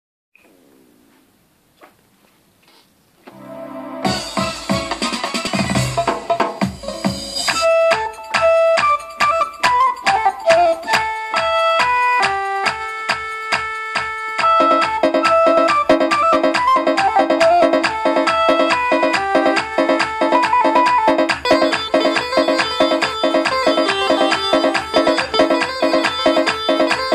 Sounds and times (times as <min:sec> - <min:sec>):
Keyboard (musical): 0:03.3 - 0:27.1.